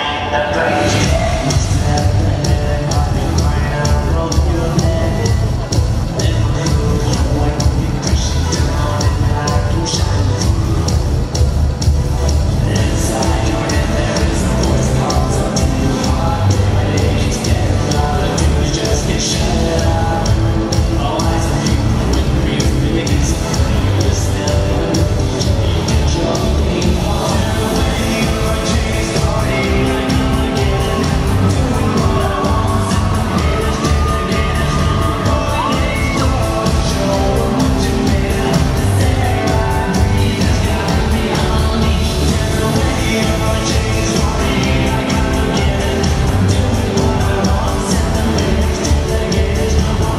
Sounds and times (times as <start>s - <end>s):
Music: 0.0s - 50.1s
Singing: 0.0s - 50.1s.